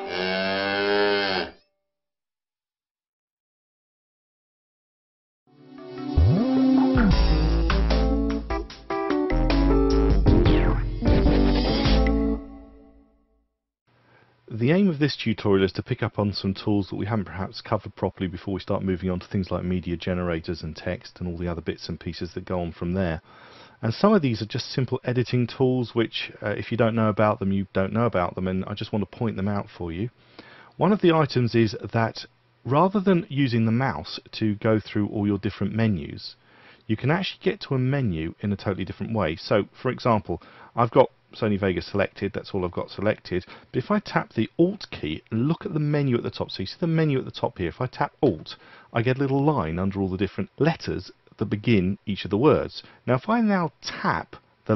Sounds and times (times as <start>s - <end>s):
Speech: 14.5s - 23.2s, 23.8s - 30.2s, 30.8s - 54.7s.